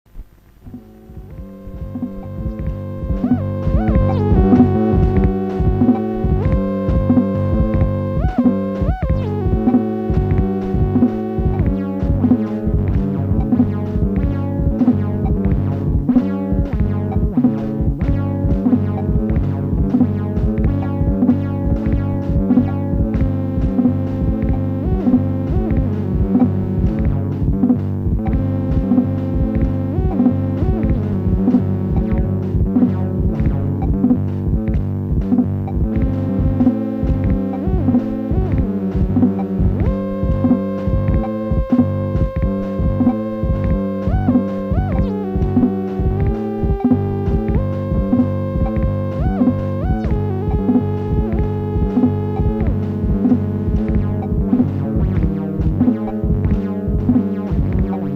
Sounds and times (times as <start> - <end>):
Music: 0.1 - 58.1.